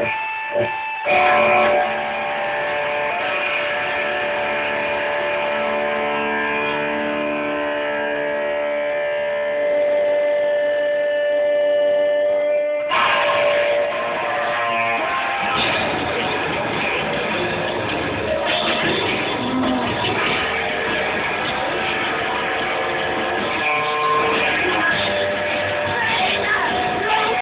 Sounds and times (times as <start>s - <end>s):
Bass guitar: 0.0s - 27.4s.